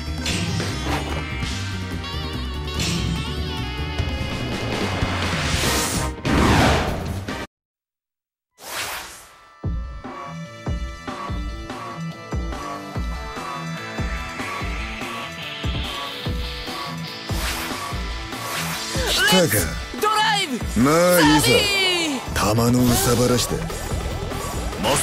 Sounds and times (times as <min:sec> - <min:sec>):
Music: 0:00.0 - 0:07.5, 0:09.3 - 0:25.0.